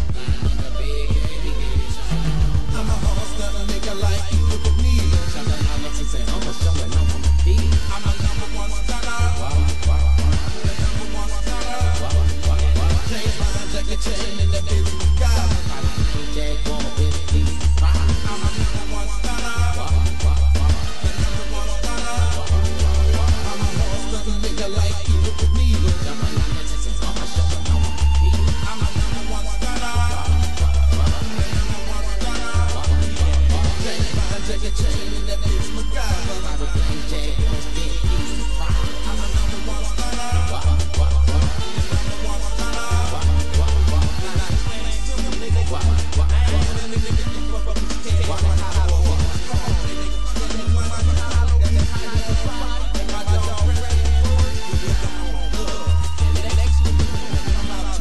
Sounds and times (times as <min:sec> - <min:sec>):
Music: 0:00.0 - 0:58.0.